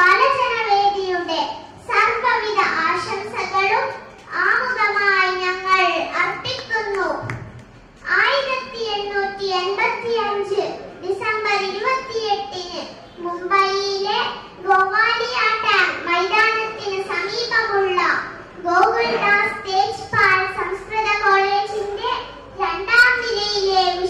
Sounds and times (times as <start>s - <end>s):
Child speech, kid speaking: 0.0s - 7.4s, 8.0s - 24.1s.